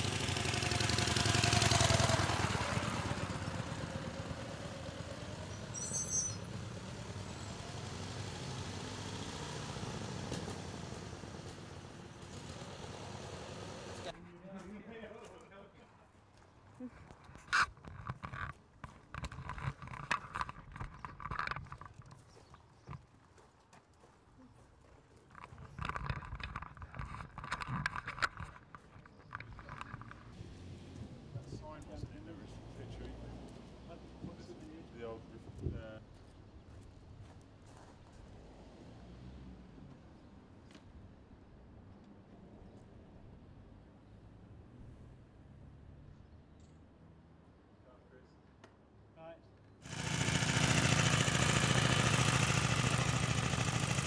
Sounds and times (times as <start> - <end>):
Vehicle: 0.0 - 54.0.